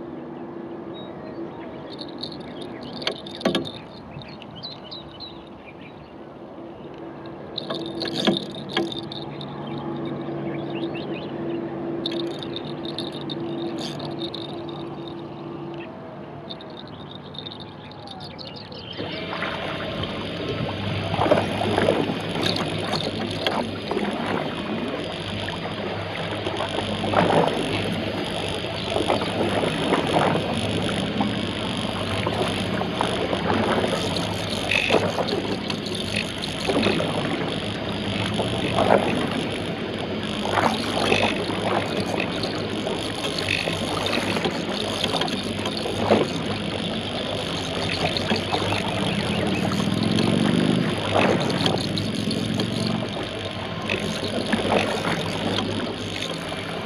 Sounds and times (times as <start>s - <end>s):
Sailboat, sailing ship: 0.0s - 56.8s.